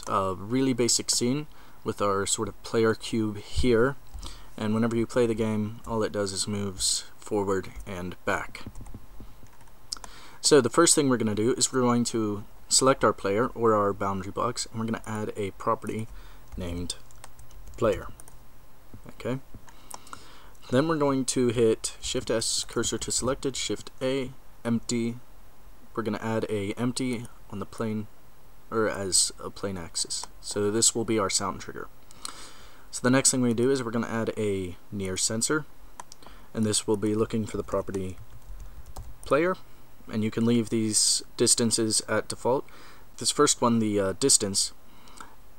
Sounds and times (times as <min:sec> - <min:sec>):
Speech: 0:00.0 - 0:04.0, 0:04.6 - 0:08.7, 0:10.4 - 0:17.1, 0:17.8 - 0:18.2, 0:19.0 - 0:19.5, 0:20.6 - 0:25.2, 0:26.0 - 0:28.1, 0:28.7 - 0:31.9, 0:32.9 - 0:35.7, 0:36.6 - 0:38.2, 0:39.3 - 0:44.8.